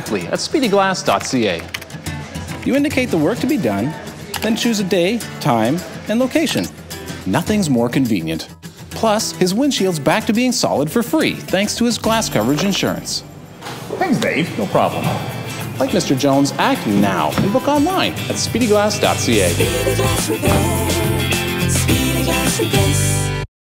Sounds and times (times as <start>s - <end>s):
Music: 0.0s - 23.5s
Speech: 2.6s - 6.7s, 7.3s - 13.2s, 13.9s - 15.2s, 15.8s - 19.6s.